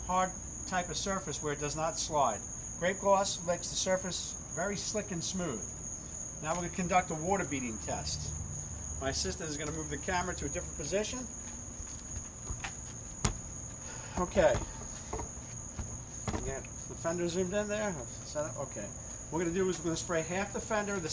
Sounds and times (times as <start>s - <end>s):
Speech: 0.1s - 5.7s, 6.4s - 8.3s, 9.0s - 11.3s, 14.2s - 14.7s, 16.4s - 21.1s.